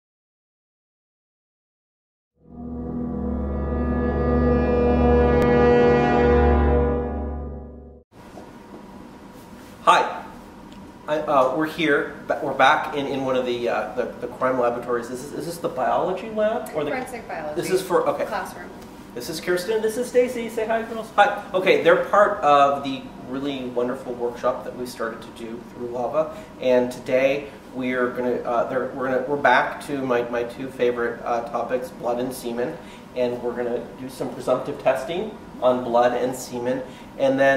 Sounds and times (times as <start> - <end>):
Foghorn: 2.5 - 7.9.